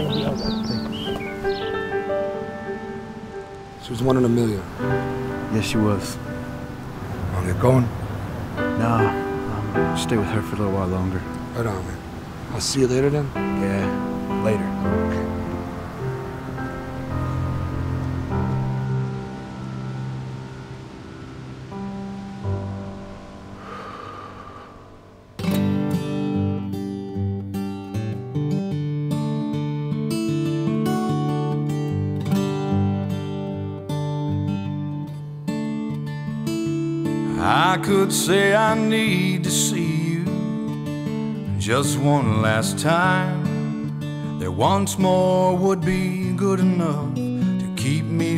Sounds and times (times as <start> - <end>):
Music: 0.0 - 48.3.